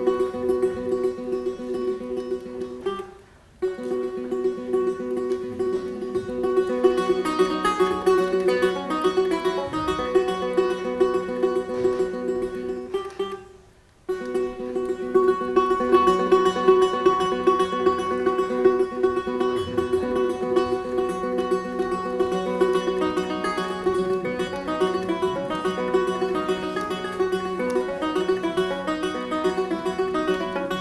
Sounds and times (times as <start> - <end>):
Music: 0.0 - 30.8.